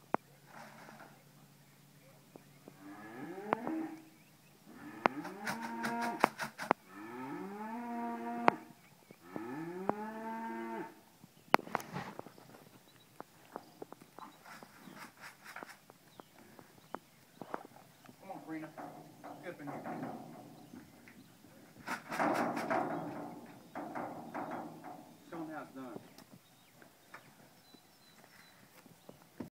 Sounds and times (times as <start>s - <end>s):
Speech: 18.2s - 20.1s, 25.3s - 26.1s.